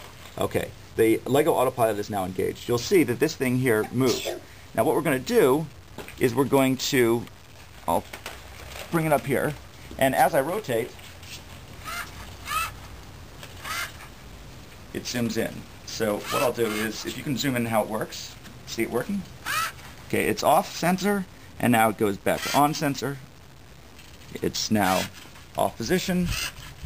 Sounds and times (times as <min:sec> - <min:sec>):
Speech: 0:00.4 - 0:07.3, 0:07.9 - 0:08.1, 0:08.9 - 0:11.0, 0:14.9 - 0:19.3, 0:20.1 - 0:23.2, 0:24.3 - 0:26.4.